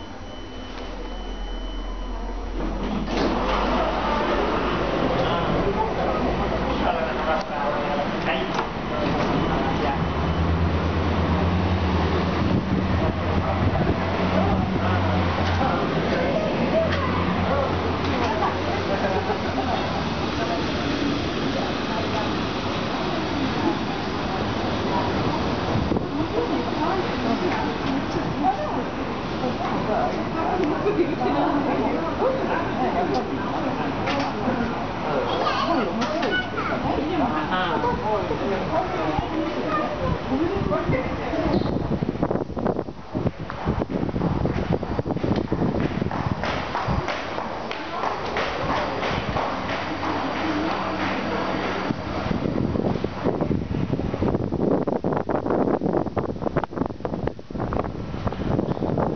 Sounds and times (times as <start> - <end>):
Wind: 0.0 - 59.1.